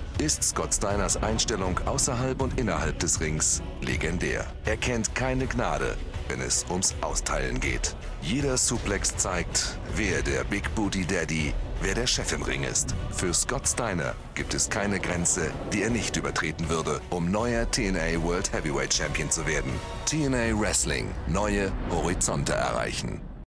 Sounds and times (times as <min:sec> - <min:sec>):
Music: 0:00.0 - 0:23.4
Speech: 0:00.2 - 0:23.3.